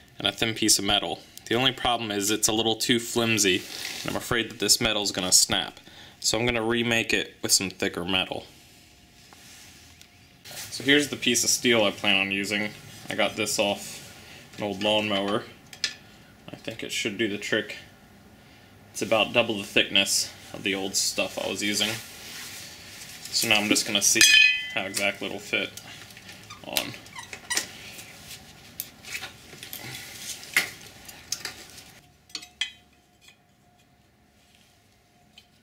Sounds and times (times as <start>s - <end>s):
Speech: 0.2s - 8.5s, 10.7s - 14.0s, 14.6s - 15.6s, 16.5s - 17.9s, 19.0s - 22.1s, 23.3s - 25.8s, 26.6s - 27.0s.